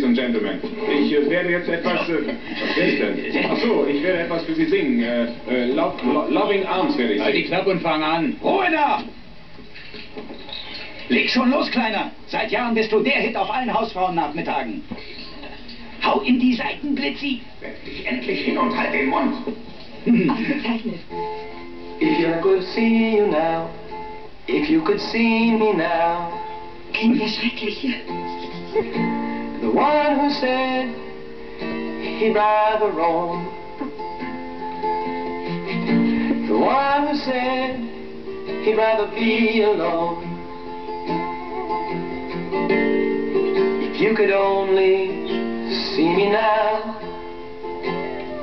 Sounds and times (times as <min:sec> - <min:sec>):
Music: 0:00.0 - 0:08.4, 0:10.5 - 0:48.4
Male singing: 0:22.0 - 0:23.8, 0:24.5 - 0:26.4, 0:29.6 - 0:31.0, 0:32.0 - 0:33.5, 0:36.5 - 0:38.0, 0:38.6 - 0:40.3, 0:43.9 - 0:47.0.